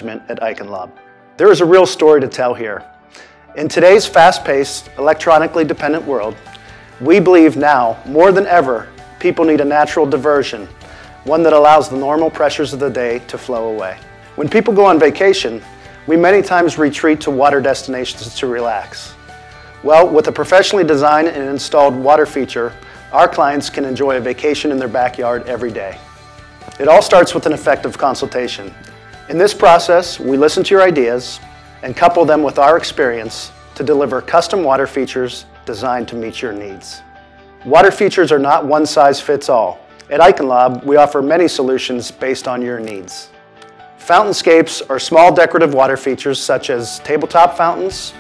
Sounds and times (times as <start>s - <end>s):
Speech: 0.0s - 2.9s, 3.6s - 6.4s, 7.0s - 10.7s, 11.3s - 19.2s, 19.9s - 26.0s, 26.8s - 28.7s, 29.3s - 37.0s, 37.7s - 43.4s, 44.0s - 48.2s
Music: 0.0s - 48.2s.